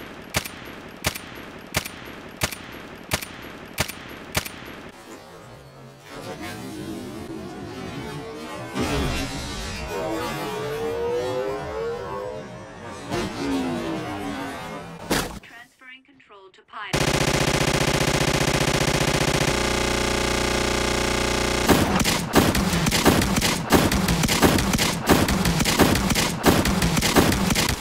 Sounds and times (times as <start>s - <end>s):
Speech: 15.4s - 17.0s
Video game music: 16.9s - 27.8s.